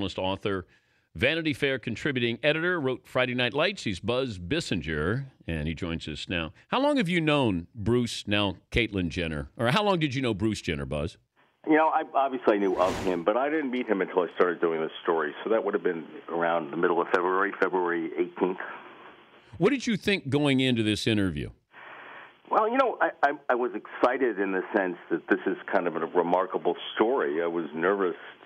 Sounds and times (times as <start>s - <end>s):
Speech: 0.0s - 18.9s, 19.6s - 21.6s, 22.5s - 28.4s.